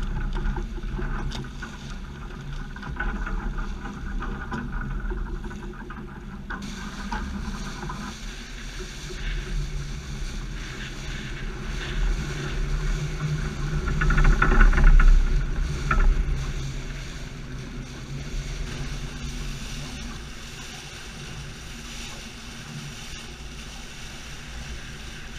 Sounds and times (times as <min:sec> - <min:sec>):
Sailboat, sailing ship: 0:00.0 - 0:25.3.